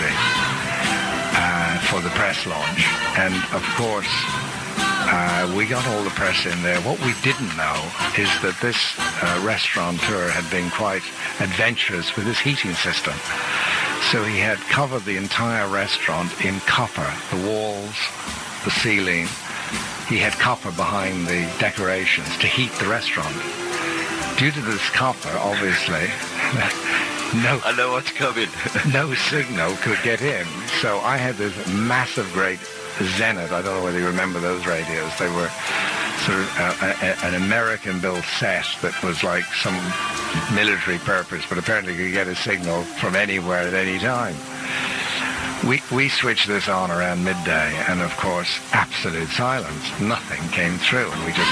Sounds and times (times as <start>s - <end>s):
Radio: 0.0s - 0.5s, 1.3s - 51.5s
Speech: 0.0s - 0.5s, 1.4s - 4.4s, 5.0s - 51.5s
Music: 0.0s - 51.5s.